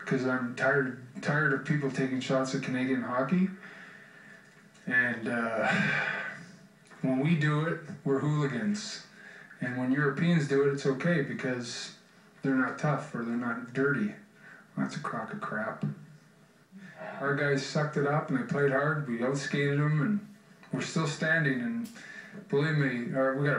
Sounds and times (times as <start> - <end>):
Male speech, man speaking: 0.0 - 3.6, 4.8 - 5.9, 7.0 - 14.2, 14.8 - 16.0, 17.0 - 23.5
Narration, monologue: 0.0 - 23.5.